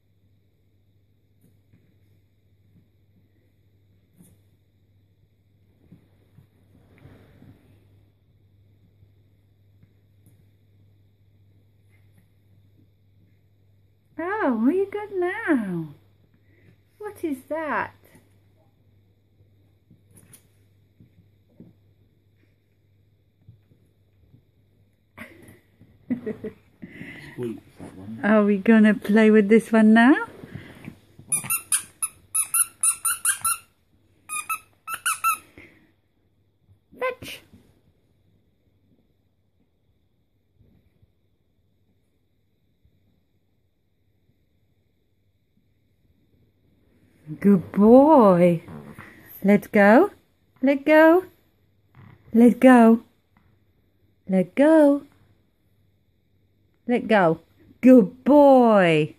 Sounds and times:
Inside, small room: 0:00.0 - 0:59.1
Speech: 0:14.2 - 0:16.0, 0:17.0 - 0:18.0, 0:27.3 - 0:30.3, 0:37.0 - 0:37.5, 0:47.3 - 0:48.7, 0:49.4 - 0:51.3, 0:52.3 - 0:53.1, 0:54.3 - 0:55.1, 0:56.9 - 0:59.1.

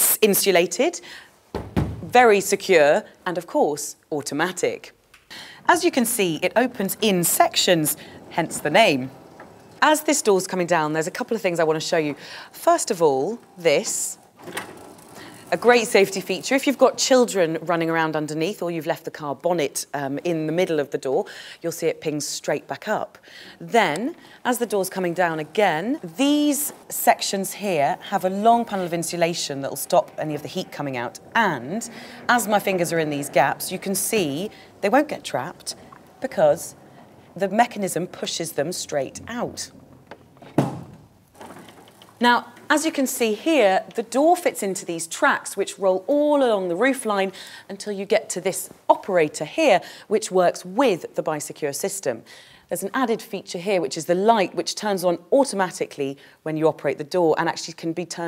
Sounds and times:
Speech: 0:00.0 - 0:01.0, 0:02.1 - 0:05.0, 0:05.7 - 0:09.2, 0:09.8 - 0:14.2, 0:15.5 - 0:36.8, 0:37.4 - 0:39.8, 0:42.2 - 0:58.2.

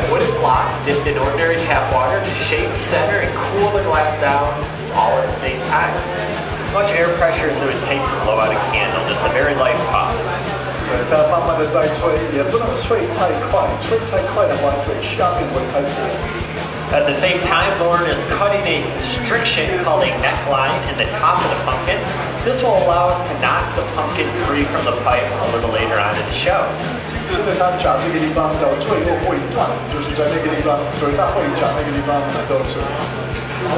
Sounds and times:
Music: 0:00.0 - 0:33.7
Speech: 0:00.0 - 0:33.7.

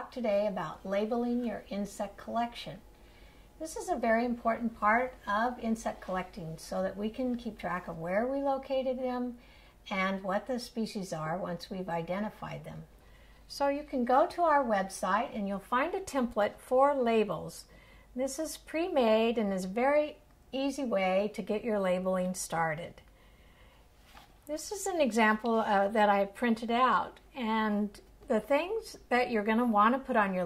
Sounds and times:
Speech: 0:00.0 - 0:02.8, 0:03.6 - 0:12.9, 0:13.5 - 0:23.0, 0:24.5 - 0:30.4.

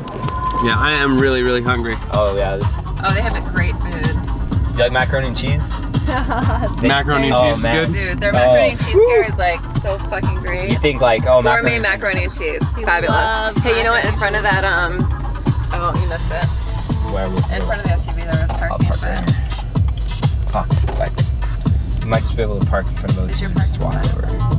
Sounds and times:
Disco: 0:00.0 - 0:19.5
Speech: 0:00.6 - 0:04.2, 0:04.8 - 0:15.0, 0:15.8 - 0:19.4, 0:20.6 - 0:21.1, 0:22.0 - 0:24.5.

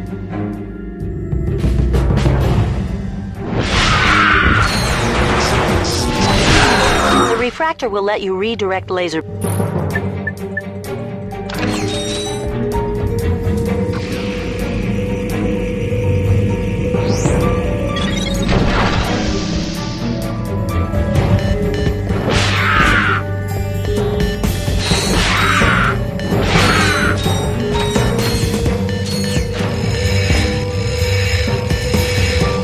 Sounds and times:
Music: 0:00.0 - 0:32.6
Speech: 0:07.0 - 0:09.2.

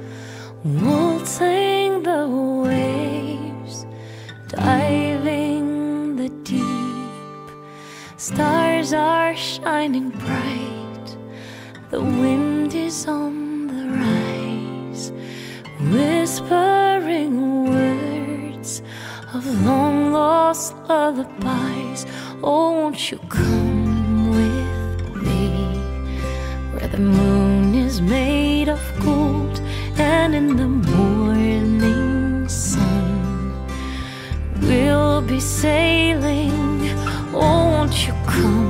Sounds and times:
Lullaby: 0:00.0 - 0:38.6.

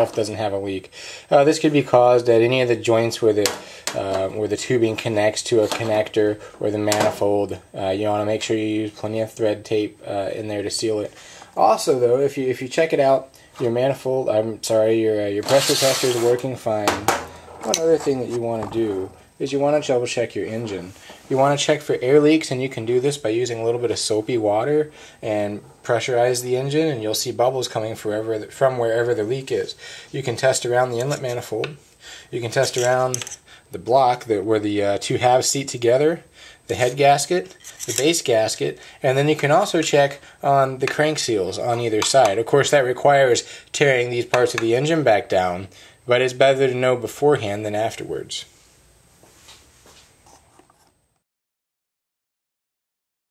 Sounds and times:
Speech: 0:00.0 - 0:48.5.

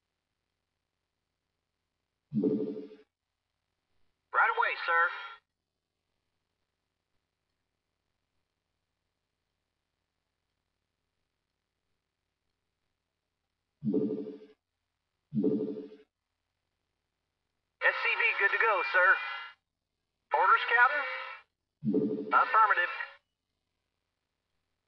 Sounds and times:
Speech: 0:04.4 - 0:05.4, 0:17.8 - 0:19.6, 0:20.4 - 0:21.4, 0:22.4 - 0:23.2.

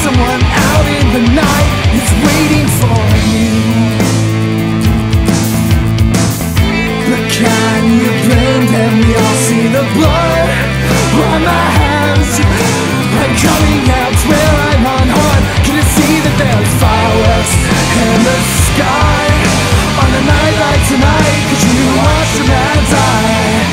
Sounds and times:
Grunge: 0:00.0 - 0:23.7.

